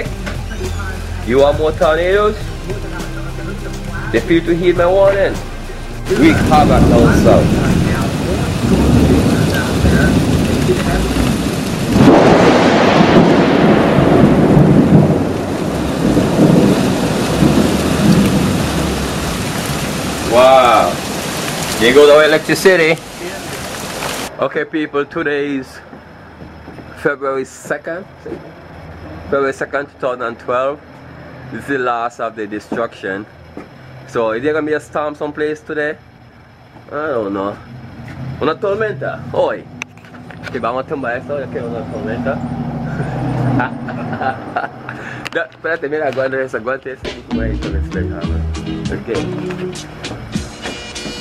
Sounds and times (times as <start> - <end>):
Speech: 0.0 - 5.4, 6.1 - 11.2, 21.8 - 23.6, 24.4 - 25.8, 27.0 - 28.4, 29.3 - 30.8, 31.6 - 33.3, 34.1 - 36.0, 36.9 - 37.6, 38.4 - 39.6, 40.4 - 42.4, 45.4 - 49.4.